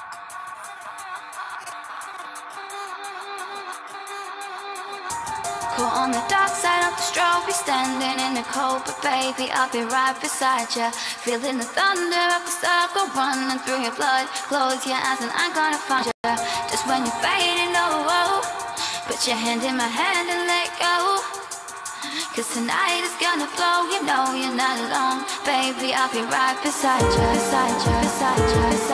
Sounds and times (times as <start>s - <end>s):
Musical instrument: 3.3s - 10.1s, 16.2s - 22.2s, 26.9s - 28.9s.